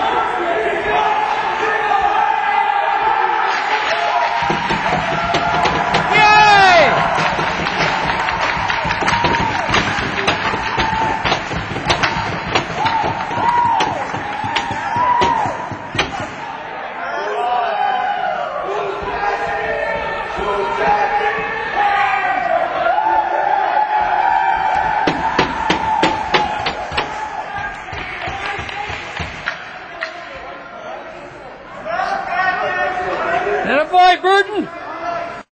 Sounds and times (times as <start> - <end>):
Speech: 30.0 - 35.4.